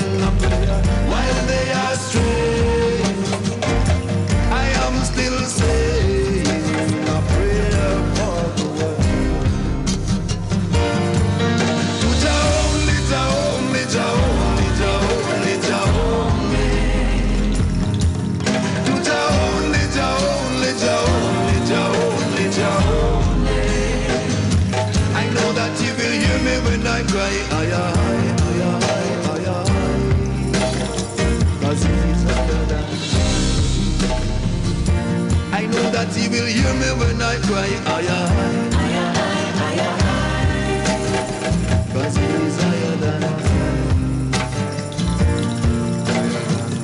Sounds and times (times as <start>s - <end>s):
Reggae: 0.0s - 46.8s.